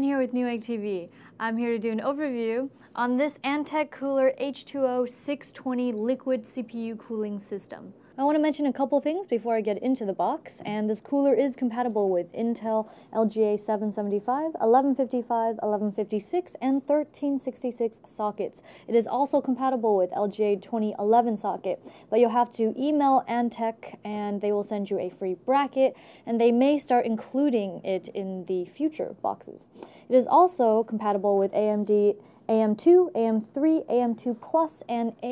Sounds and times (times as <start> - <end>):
Speech: 0.0 - 35.3.